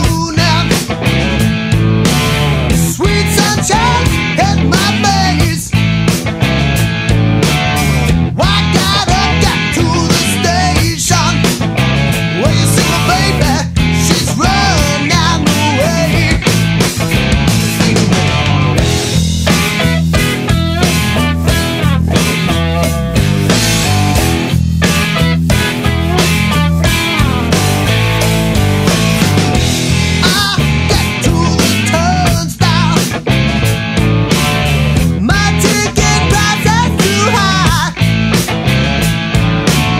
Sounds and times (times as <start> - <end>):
Heavy metal: 0.0 - 39.9.